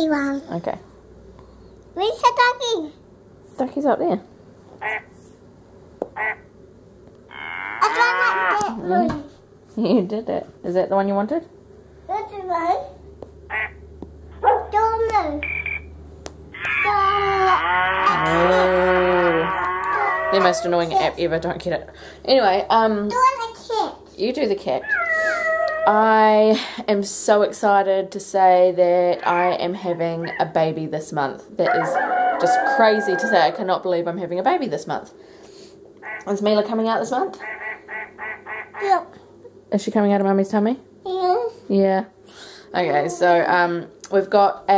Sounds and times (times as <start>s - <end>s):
Child speech, kid speaking: 0.0s - 0.6s, 2.0s - 3.0s, 7.8s - 9.3s, 12.1s - 13.0s, 14.6s - 15.5s, 16.7s - 19.3s, 22.8s - 24.2s, 38.8s - 39.2s, 41.0s - 41.7s
Inside, small room: 0.0s - 44.7s.